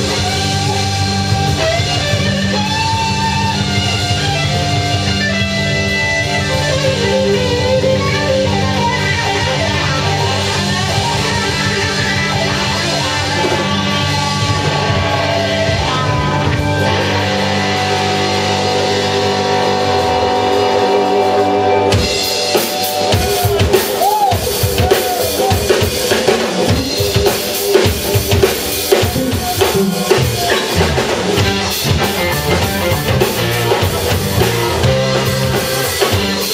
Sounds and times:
Funk: 0:00.0 - 0:36.5
Rhythm and blues: 0:00.0 - 0:36.5.

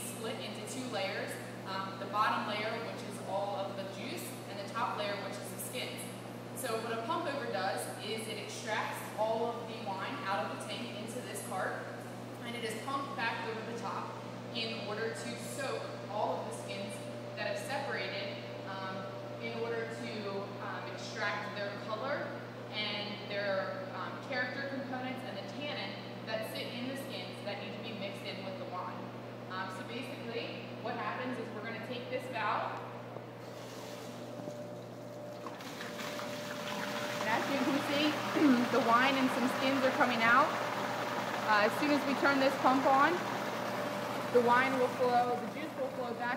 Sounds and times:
Speech: 0:00.0 - 0:32.9, 0:37.2 - 0:40.6, 0:41.5 - 0:43.3, 0:44.4 - 0:46.3.

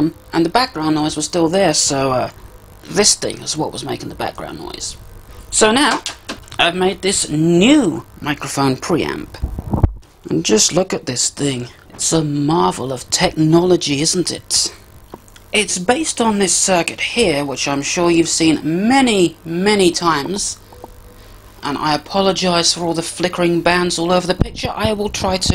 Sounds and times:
Narration, monologue: 0:00.0 - 0:25.5.

